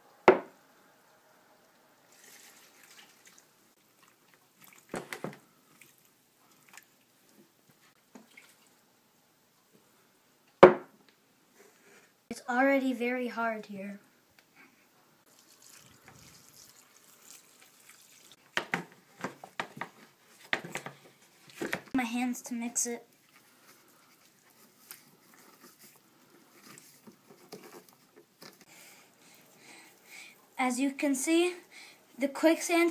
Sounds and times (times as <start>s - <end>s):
Speech: 12.3s - 14.1s, 22.0s - 23.1s, 30.6s - 31.6s, 32.2s - 32.9s.